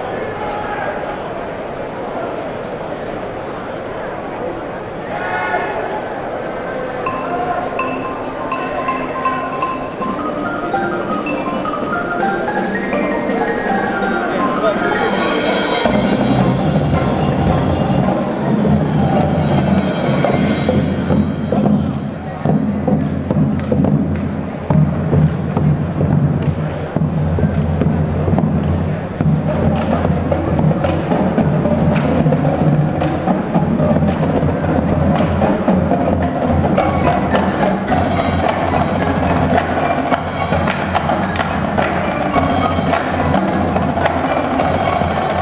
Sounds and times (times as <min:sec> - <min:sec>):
Music: 0:07.1 - 0:45.4.